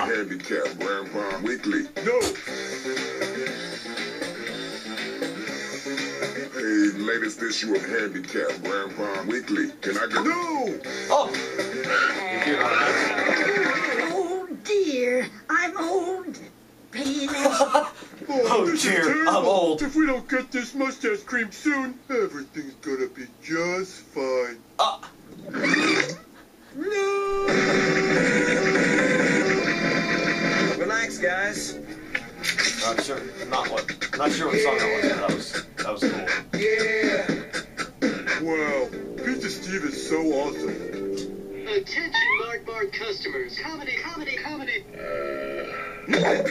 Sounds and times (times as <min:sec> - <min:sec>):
Inside, small room: 0:00.0 - 0:46.5.